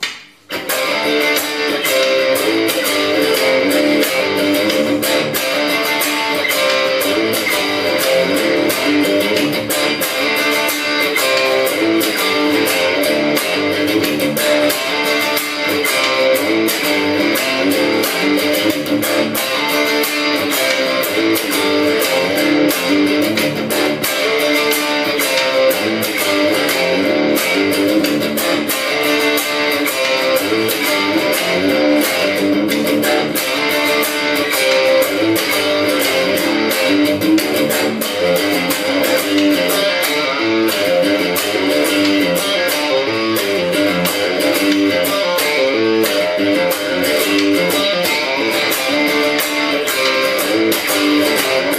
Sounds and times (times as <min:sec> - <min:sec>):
Electric guitar: 0:00.0 - 0:51.7
Strum: 0:00.0 - 0:51.7.